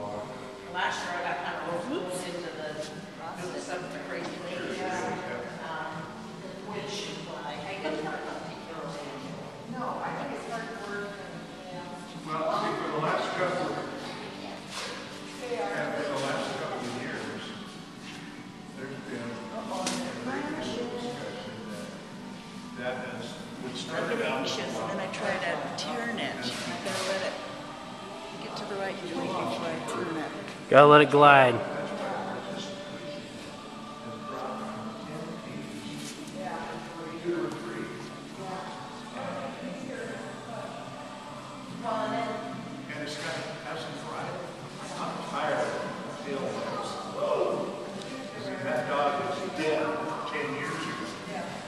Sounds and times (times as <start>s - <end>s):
Speech: 30.7s - 31.8s.